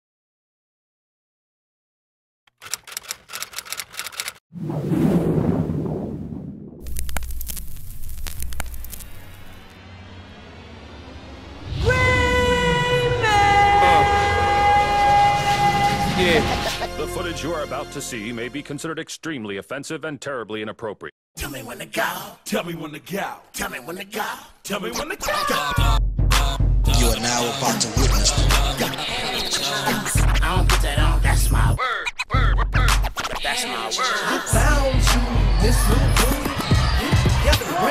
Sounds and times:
Music: 0:09.6 - 0:18.8, 0:25.6 - 0:31.8, 0:32.4 - 0:33.4, 0:34.1 - 0:37.9.

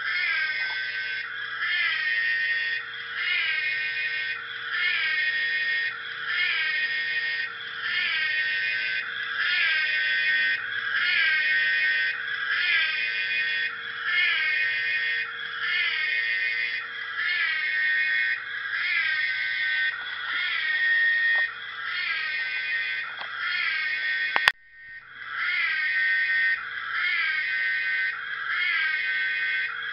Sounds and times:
Siren: 0:00.0 - 0:29.9.

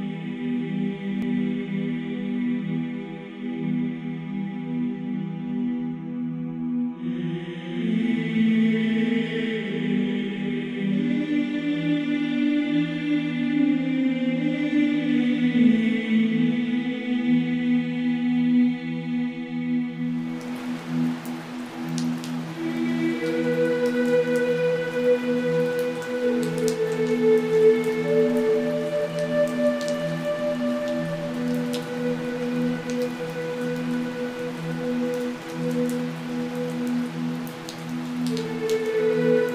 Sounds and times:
Rain on surface: 0:20.0 - 0:39.5
Raindrop: 0:20.2 - 0:39.5.

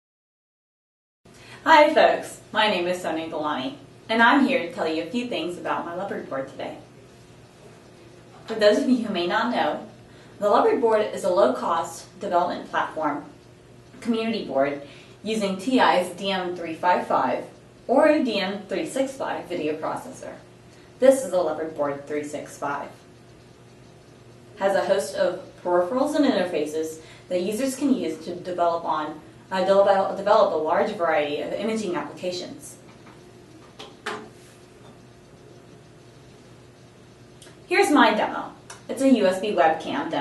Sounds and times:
Speech: 0:01.6 - 0:06.9, 0:08.4 - 0:13.4, 0:14.0 - 0:23.0, 0:24.6 - 0:32.8, 0:37.7 - 0:40.2.

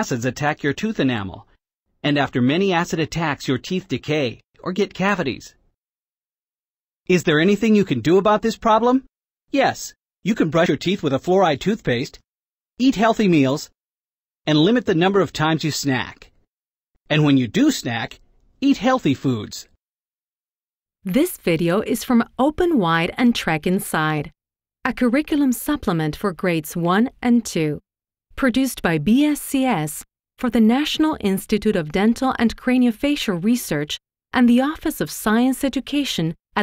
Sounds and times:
Speech: 0:00.0 - 0:01.5, 0:02.1 - 0:05.6, 0:07.1 - 0:12.2, 0:12.8 - 0:13.8, 0:14.5 - 0:16.3, 0:17.1 - 0:19.8, 0:21.1 - 0:24.3, 0:24.9 - 0:27.8, 0:28.4 - 0:36.6.

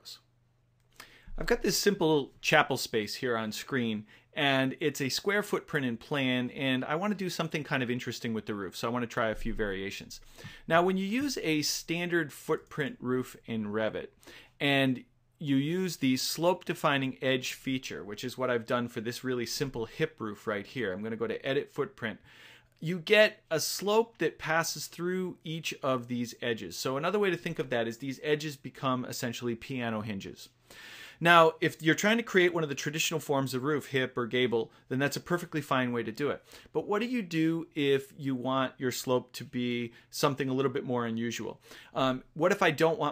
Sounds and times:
Speech: 0:00.0 - 0:00.3, 0:01.4 - 0:22.2, 0:22.8 - 0:30.5, 0:31.2 - 0:43.1.

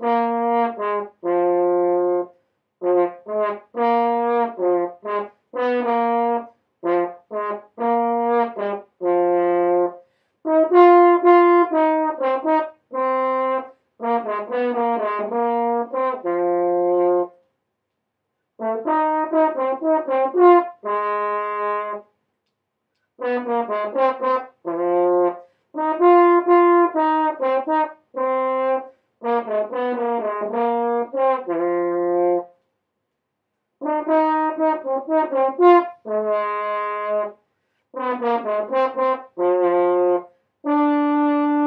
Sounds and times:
French horn: 0:00.0 - 0:17.5, 0:18.6 - 0:22.2, 0:23.2 - 0:32.7, 0:33.8 - 0:41.6.

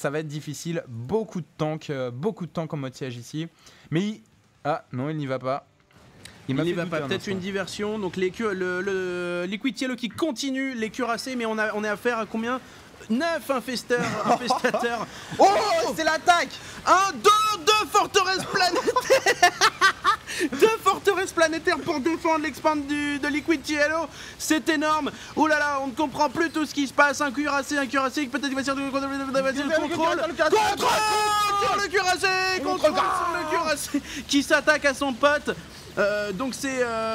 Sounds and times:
Speech: 0:00.0 - 0:05.7, 0:06.5 - 0:19.0, 0:20.5 - 0:37.1.

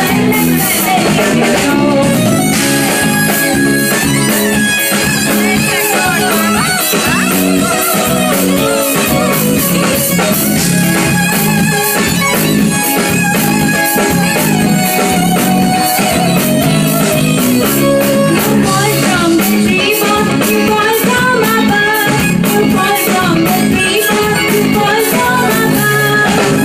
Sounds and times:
Music: 0:00.0 - 0:26.6.

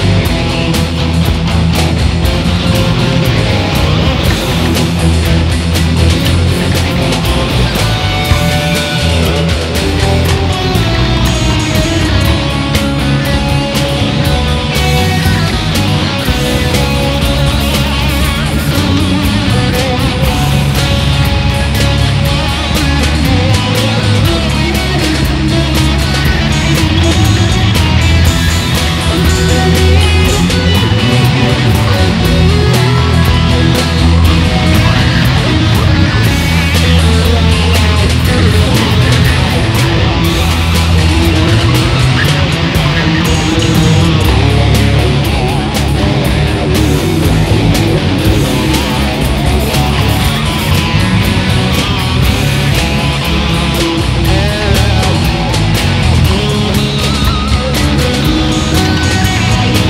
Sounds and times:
Guitar: 0:00.0 - 0:59.8
Heavy metal: 0:00.0 - 0:59.8
Progressive rock: 0:00.0 - 0:59.8.

